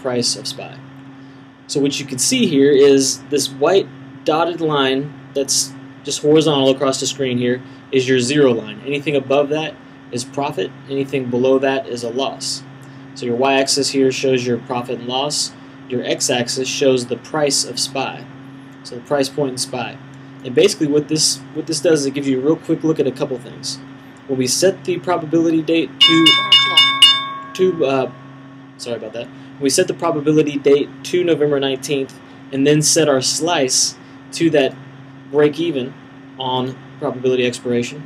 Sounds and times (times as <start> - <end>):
Speech: 0.0 - 0.9, 1.7 - 26.8, 27.6 - 28.1, 28.8 - 38.0.